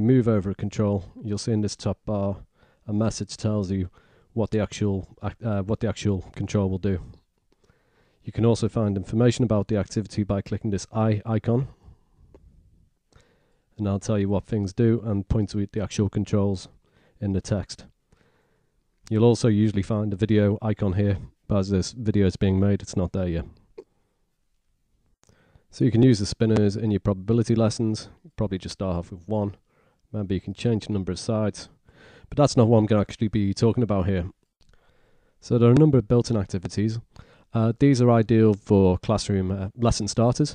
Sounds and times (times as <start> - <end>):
Speech: 0.0 - 7.2, 8.2 - 11.9, 13.8 - 17.9, 19.1 - 23.6, 25.7 - 34.4, 35.4 - 40.5
Inside, small room: 0.0 - 40.5.